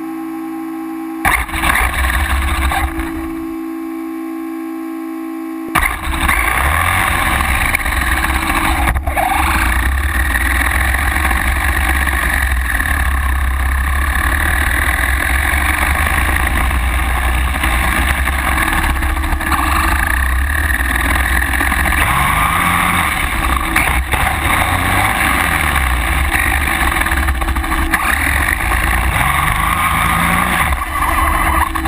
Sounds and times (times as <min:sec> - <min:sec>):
Truck: 0:01.2 - 0:03.6, 0:05.7 - 0:31.8.